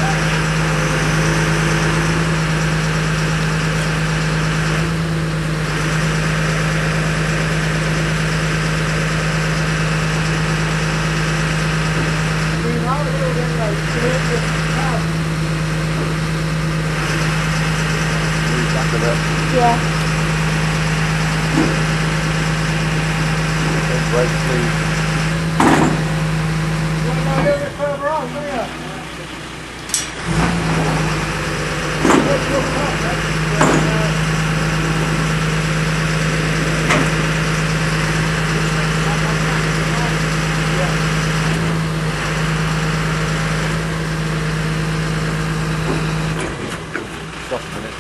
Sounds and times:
Speech: 0:12.6 - 0:15.1, 0:18.5 - 0:19.9, 0:23.7 - 0:24.8, 0:27.0 - 0:29.3, 0:32.2 - 0:34.2, 0:38.5 - 0:41.1, 0:47.5 - 0:48.0.

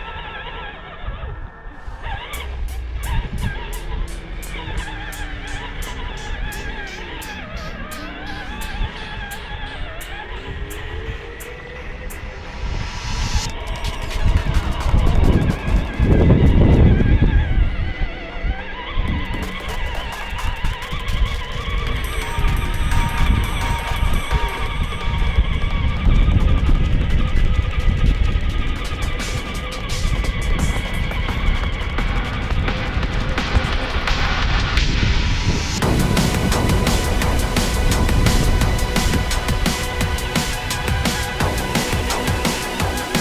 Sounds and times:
Music: 0:00.0 - 0:43.2
Vehicle: 0:00.0 - 0:43.2.

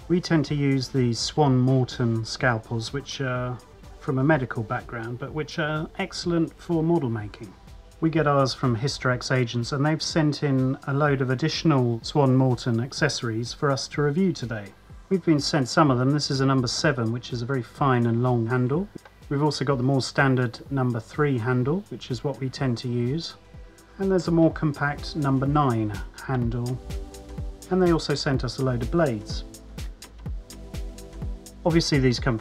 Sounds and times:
Speech: 0:00.0 - 0:23.4, 0:24.0 - 0:26.8, 0:27.7 - 0:29.5, 0:31.6 - 0:32.4
Music: 0:00.0 - 0:32.4.

